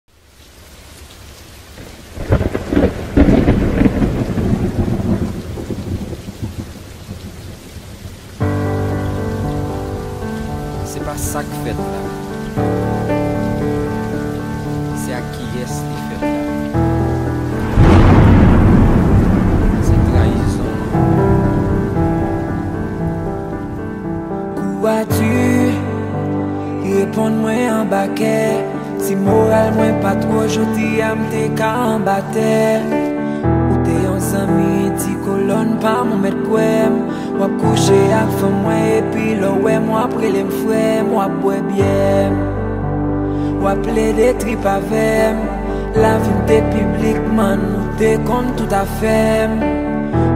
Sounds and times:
Rain on surface: 0.1s - 41.8s, 43.3s - 49.4s
Thunder: 2.2s - 8.2s, 17.5s - 24.2s.

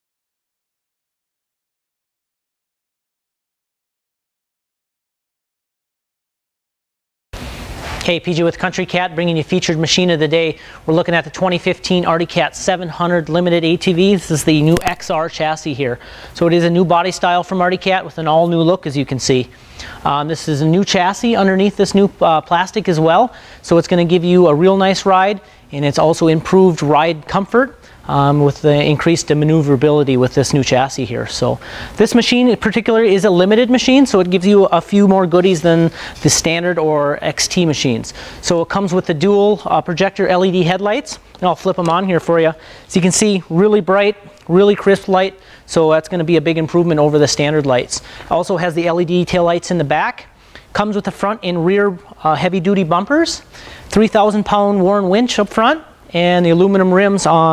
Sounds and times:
Speech: 8.0s - 57.5s.

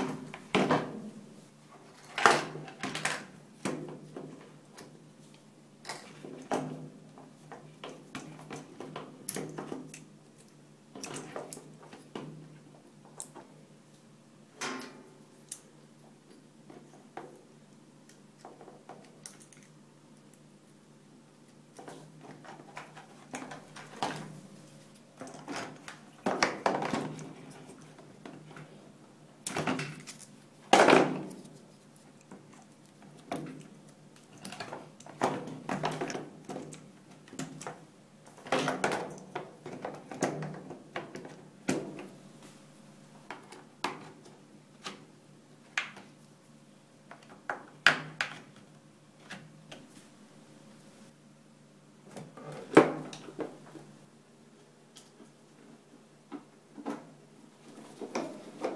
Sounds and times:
Inside, small room: 0.0s - 58.7s.

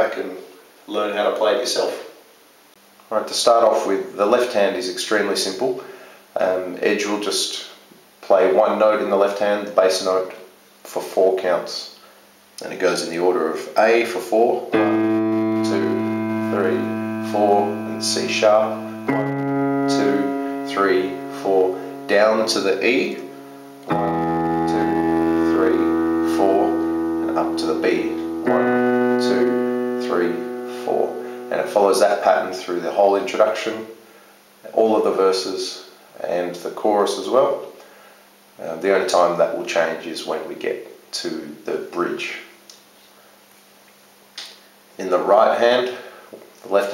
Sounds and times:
Speech: 0.0s - 2.2s, 3.1s - 12.0s, 12.6s - 14.9s, 15.6s - 18.9s, 19.9s - 23.3s, 24.7s - 28.6s, 29.2s - 34.0s, 34.6s - 37.8s, 38.6s - 42.6s, 45.0s - 46.9s.

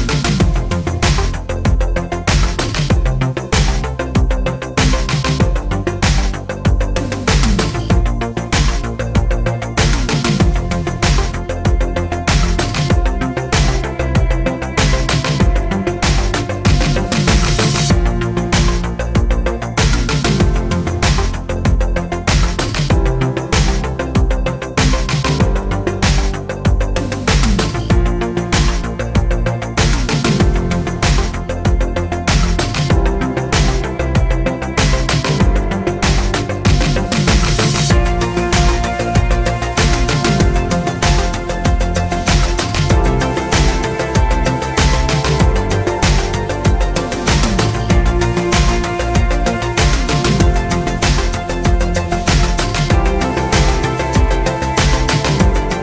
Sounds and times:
Music: 0.0s - 55.8s.

